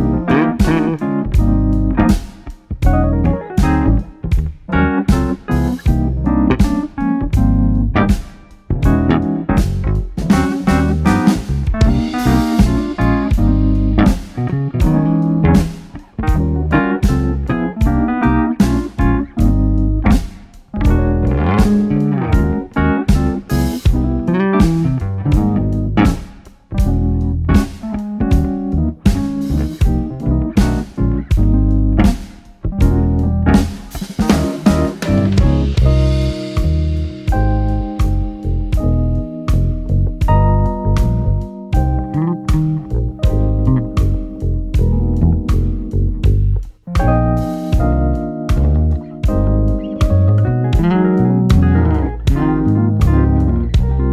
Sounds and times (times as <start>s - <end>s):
Music: 0.0s - 54.1s.